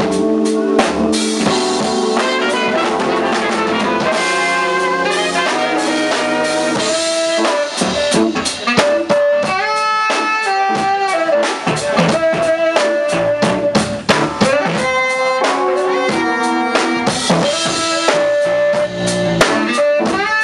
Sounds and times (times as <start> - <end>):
Music: 0.0 - 20.4.